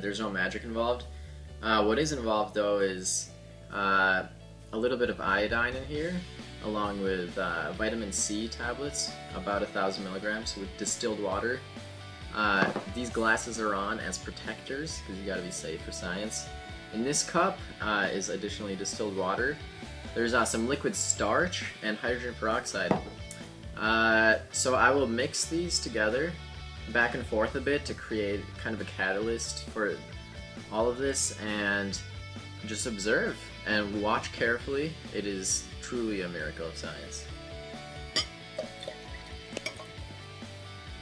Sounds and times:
Speech: 0.0s - 11.6s, 12.3s - 19.6s, 20.2s - 23.0s, 23.8s - 30.0s, 30.7s - 32.0s, 32.6s - 37.3s
Music: 0.0s - 41.0s.

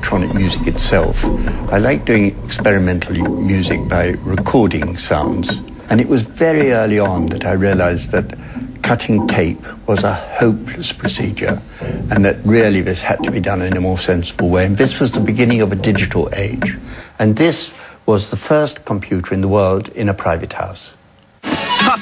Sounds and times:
Speech: 0.0s - 21.0s.

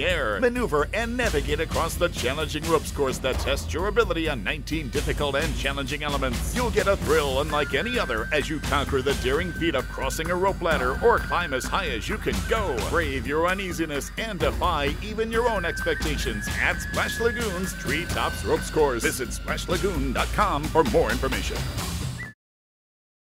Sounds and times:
Speech: 0.0s - 21.7s
Music: 0.0s - 22.4s.

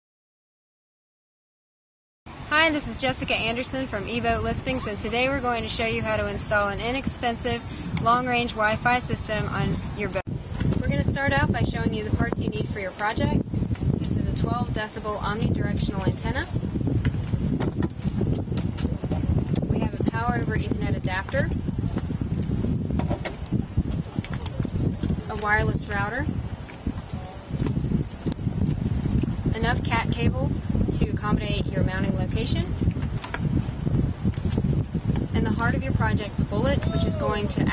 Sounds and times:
Speech: 2.5s - 10.2s, 10.8s - 13.4s, 14.0s - 16.5s, 19.7s - 21.5s, 25.3s - 26.3s, 29.6s - 32.7s, 35.4s - 37.7s.

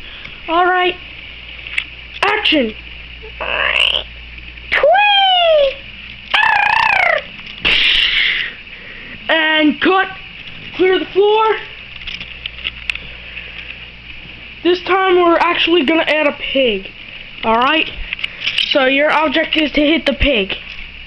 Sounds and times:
Speech: 0.5s - 1.0s, 2.2s - 2.8s, 9.3s - 10.2s, 10.8s - 11.8s, 14.6s - 18.0s, 18.7s - 20.6s.

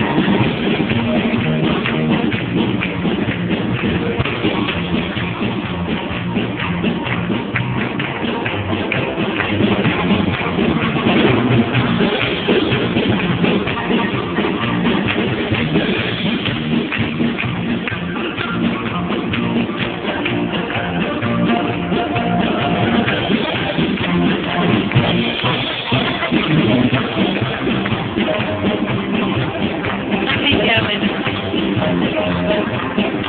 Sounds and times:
Christmas music: 0.0s - 33.2s.

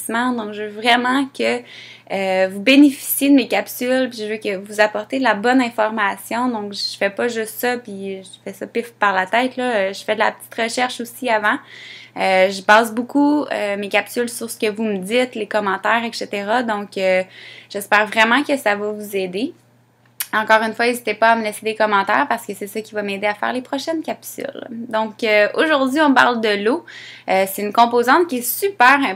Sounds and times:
Speech: 0.0s - 11.6s, 12.2s - 19.6s, 20.2s - 29.1s.

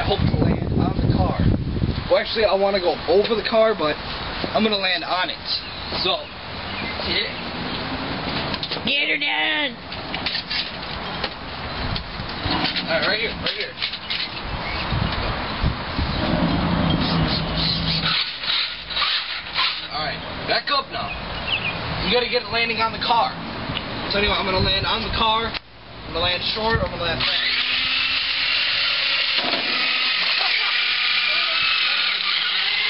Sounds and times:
Speech: 24.1s - 27.4s.

